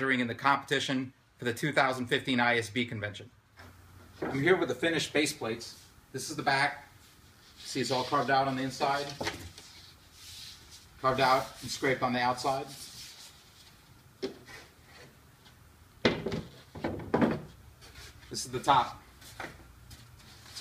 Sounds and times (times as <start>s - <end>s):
Speech: 0.0s - 3.4s, 4.3s - 6.9s, 7.7s - 9.2s, 11.0s - 12.8s, 18.3s - 19.0s.